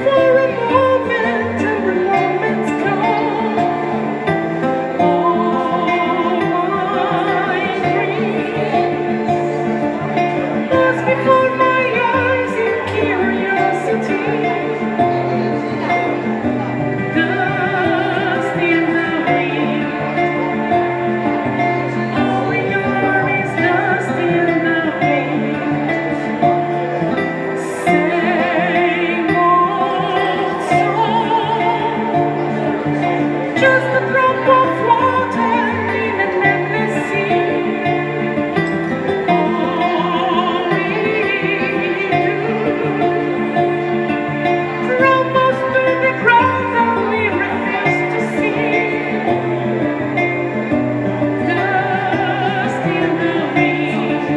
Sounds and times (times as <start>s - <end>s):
Music: 0.0s - 54.3s.